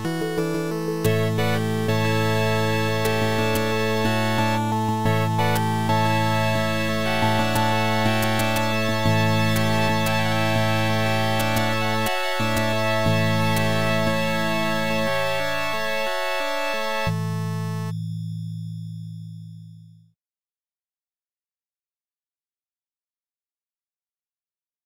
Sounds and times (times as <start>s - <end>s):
Music: 0.0s - 20.2s.